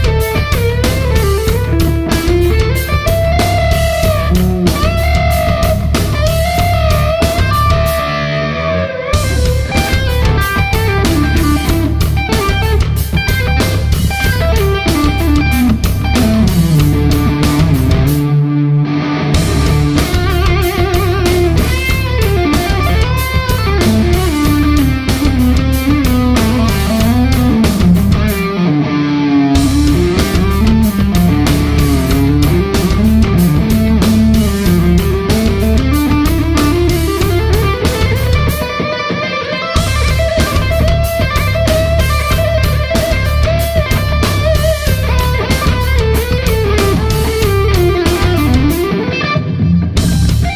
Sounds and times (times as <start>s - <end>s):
Guitar: 0.0s - 50.5s.